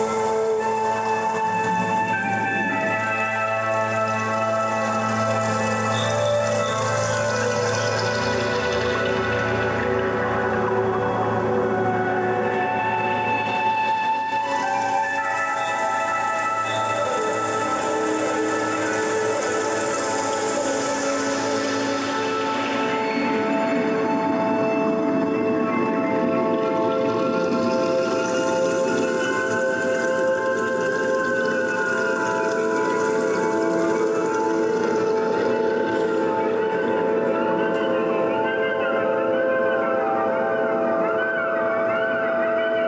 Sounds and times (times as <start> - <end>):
Ambient music: 0.0 - 42.8
Musical instrument: 0.0 - 42.8.